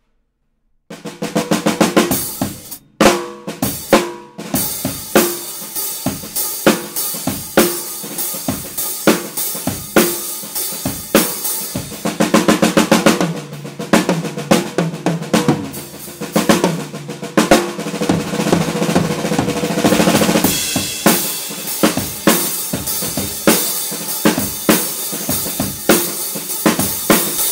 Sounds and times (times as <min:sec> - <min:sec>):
Music: 0:00.0 - 0:27.5.